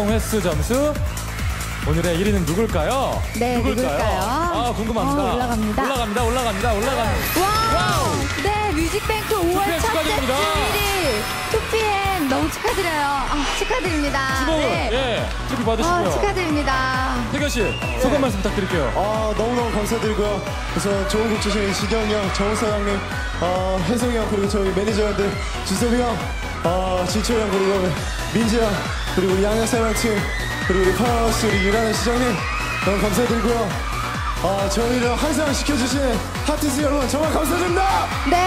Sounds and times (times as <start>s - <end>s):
Music: 0.0s - 38.4s.